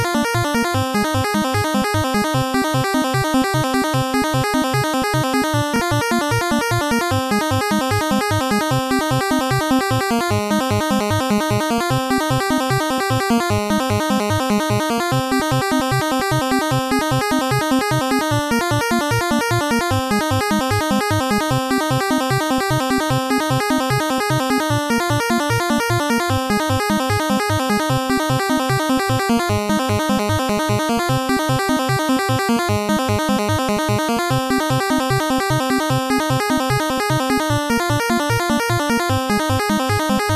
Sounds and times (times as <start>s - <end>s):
Video game music: 0.0s - 40.3s.